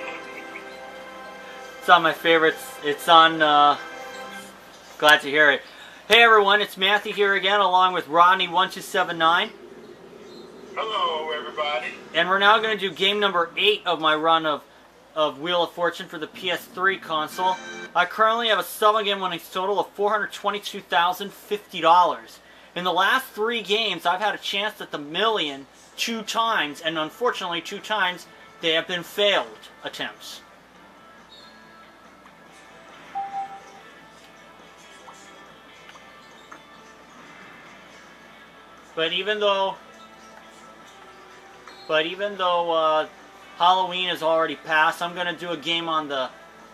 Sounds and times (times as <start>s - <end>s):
Music: 0.0s - 14.5s, 15.9s - 19.4s, 23.0s - 46.7s
Speech: 1.8s - 3.8s, 5.0s - 9.5s, 10.8s - 30.5s, 39.0s - 39.8s, 41.9s - 46.4s.